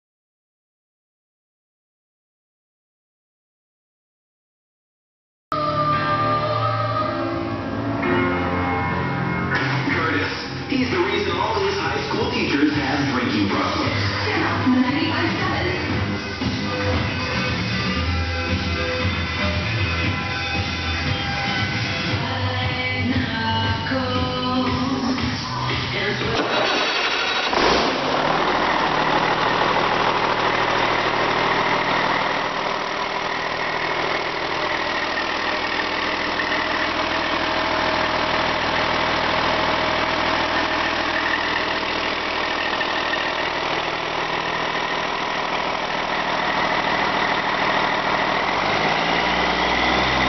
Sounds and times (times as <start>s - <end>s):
Medium engine (mid frequency): 5.6s - 50.2s.